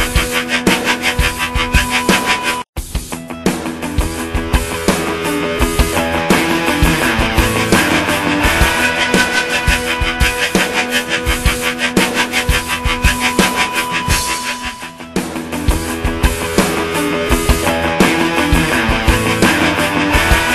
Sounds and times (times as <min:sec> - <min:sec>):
Music: 0:00.0 - 0:20.5.